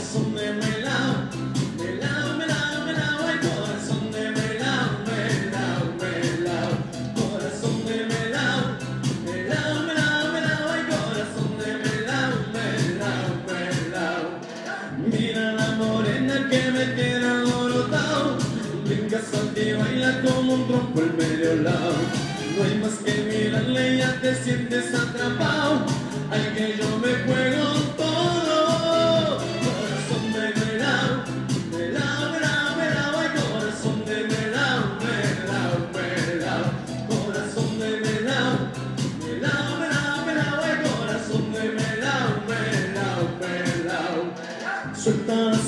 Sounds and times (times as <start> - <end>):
Music: 0.0 - 45.6.